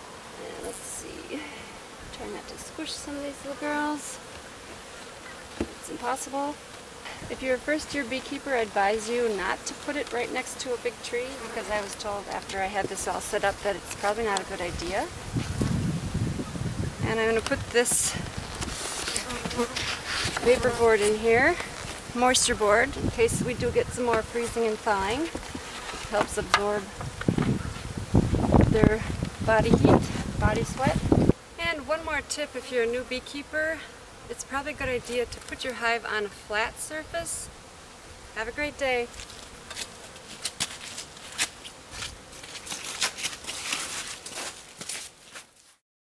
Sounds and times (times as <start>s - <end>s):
Bee, wasp, etc.: 0.0s - 45.8s
Rustling leaves: 0.0s - 45.8s
Speech: 0.4s - 4.2s, 5.8s - 6.6s, 7.3s - 15.1s, 17.0s - 18.2s, 20.4s - 25.3s, 26.1s - 26.9s, 28.7s - 31.0s, 31.6s - 37.5s, 38.4s - 39.1s.